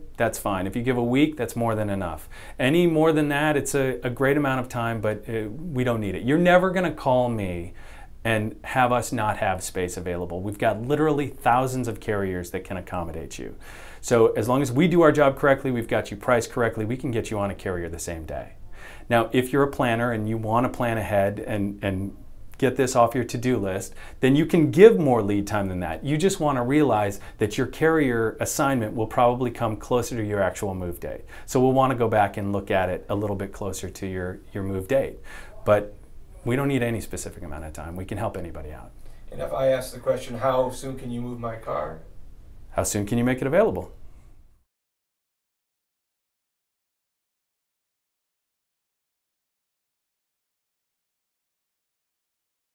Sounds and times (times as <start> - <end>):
Speech: 0.0 - 42.1, 42.7 - 44.0.